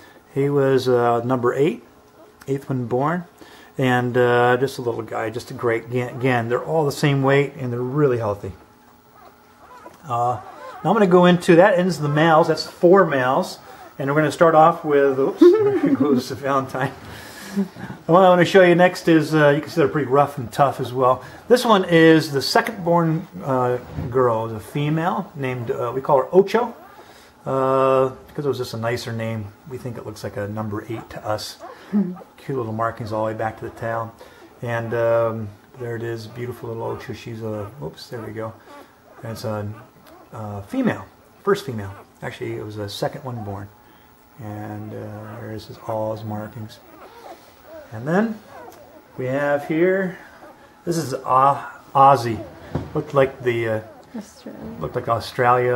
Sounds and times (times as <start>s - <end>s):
Inside, small room: 0.0s - 55.7s
Speech: 0.3s - 8.6s, 10.0s - 17.0s, 18.0s - 26.8s, 27.4s - 38.6s, 39.2s - 43.7s, 44.4s - 46.9s, 47.9s - 48.5s, 49.2s - 50.2s, 50.9s - 55.7s
Dog: 9.2s - 10.9s, 26.7s - 27.1s, 38.7s - 40.4s, 46.8s - 50.6s, 53.8s - 54.2s.